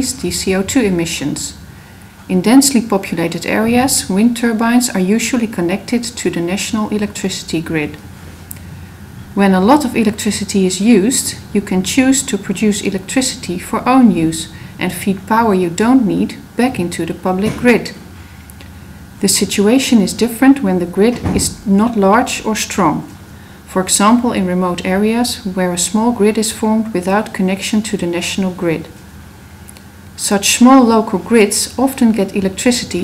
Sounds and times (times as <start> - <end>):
Speech: 0.0 - 1.6, 2.3 - 8.0, 9.4 - 18.0, 19.2 - 29.0, 30.2 - 33.0.